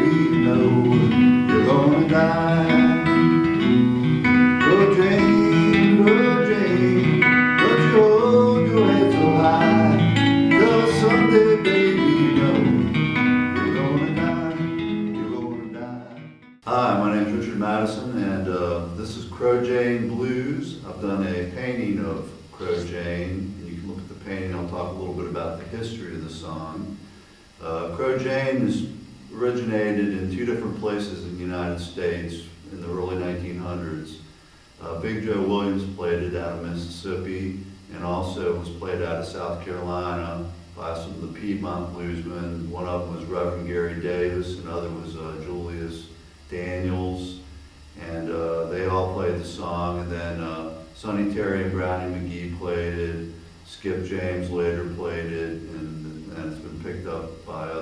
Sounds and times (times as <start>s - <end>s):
Speech: 0.0s - 2.8s, 15.3s - 27.0s, 27.6s - 34.2s, 34.8s - 47.4s, 48.0s - 57.8s
Music: 0.0s - 16.7s.